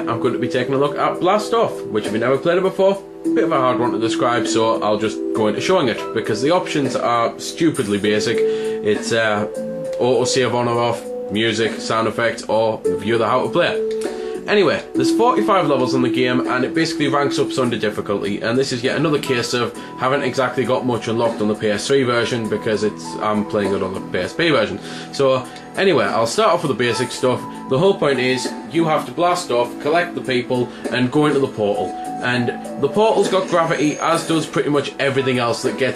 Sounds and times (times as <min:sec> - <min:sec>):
Speech: 0:00.0 - 0:13.8, 0:14.5 - 0:35.9
Music: 0:00.0 - 0:35.9.